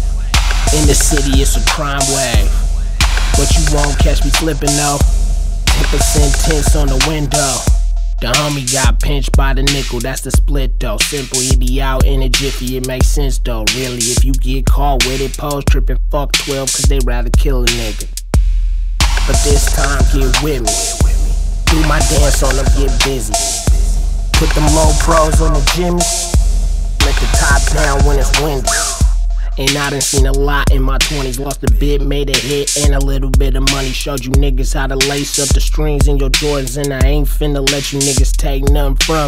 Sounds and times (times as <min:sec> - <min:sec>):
Music: 0:00.0 - 0:39.2.